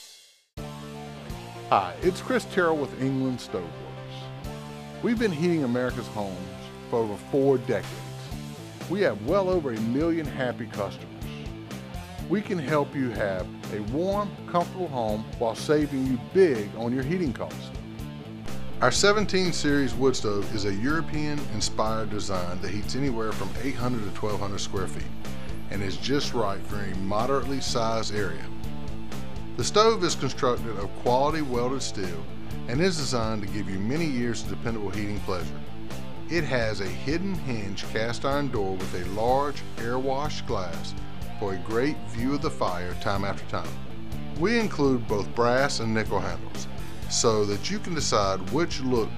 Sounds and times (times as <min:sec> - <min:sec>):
Music: 0:00.0 - 0:49.1
Speech: 0:01.7 - 0:04.3, 0:05.0 - 0:08.1, 0:08.9 - 0:11.1, 0:12.3 - 0:17.8, 0:18.8 - 0:25.1, 0:25.7 - 0:28.5, 0:29.6 - 0:35.5, 0:36.3 - 0:43.8, 0:44.4 - 0:49.1.